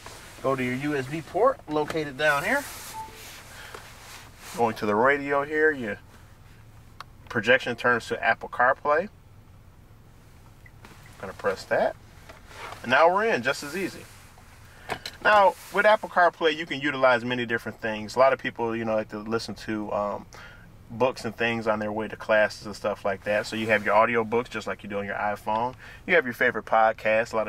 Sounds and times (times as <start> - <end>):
Speech: 0.4 - 2.7, 4.5 - 6.0, 7.3 - 9.1, 11.2 - 12.0, 12.8 - 14.1, 15.2 - 20.3, 20.9 - 27.4.